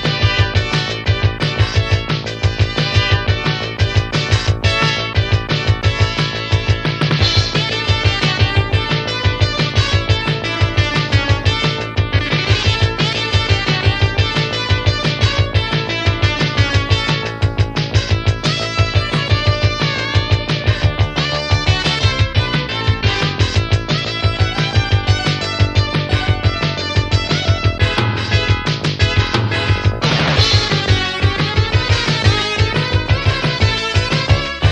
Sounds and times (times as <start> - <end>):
Music: 0.0 - 34.7.